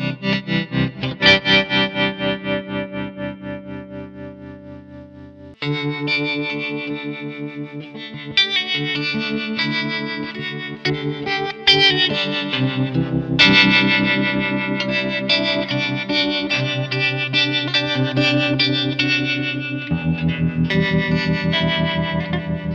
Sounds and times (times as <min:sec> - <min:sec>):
Music: 0:00.0 - 0:22.7.